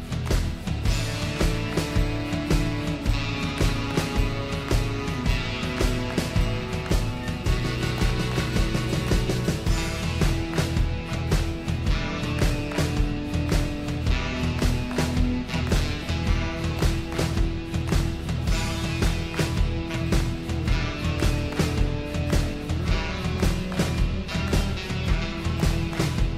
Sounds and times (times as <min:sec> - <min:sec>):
Music: 0:00.0 - 0:26.3.